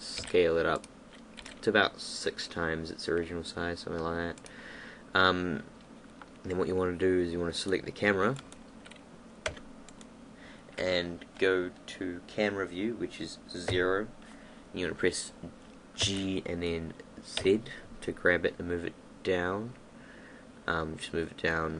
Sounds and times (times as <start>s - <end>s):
Speech: 0.0s - 0.8s, 1.6s - 4.4s, 5.2s - 5.7s, 6.4s - 8.4s, 10.8s - 14.2s, 14.8s - 19.8s, 20.7s - 21.7s
Computer keyboard: 0.1s - 1.6s.